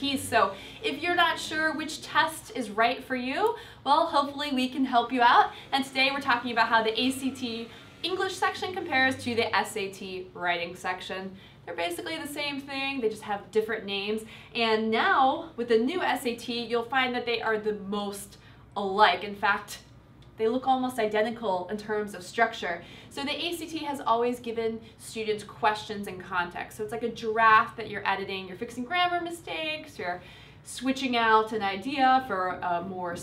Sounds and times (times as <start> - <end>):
Speech: 0.0 - 33.2.